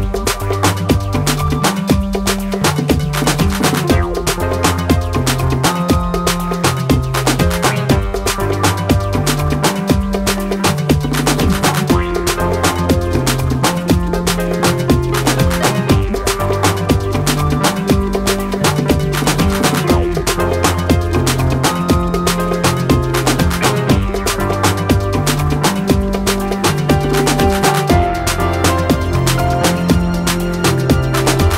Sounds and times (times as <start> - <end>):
Afrobeat: 0.0 - 31.5.